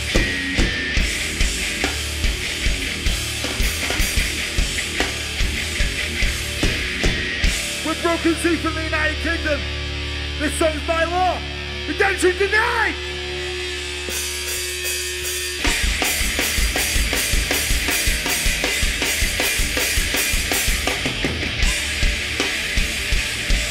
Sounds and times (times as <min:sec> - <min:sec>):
Music: 0:00.0 - 0:23.7
Speech: 0:07.8 - 0:09.7, 0:10.4 - 0:13.1.